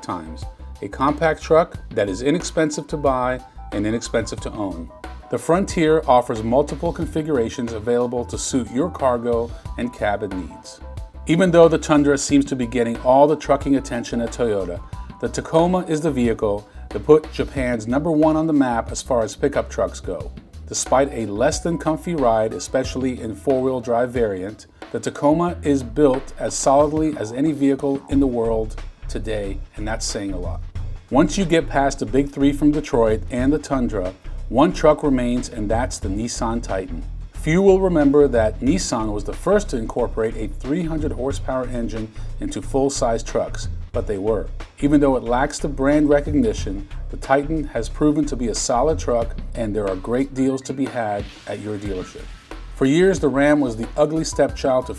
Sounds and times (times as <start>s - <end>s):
Speech: 0.0s - 54.9s.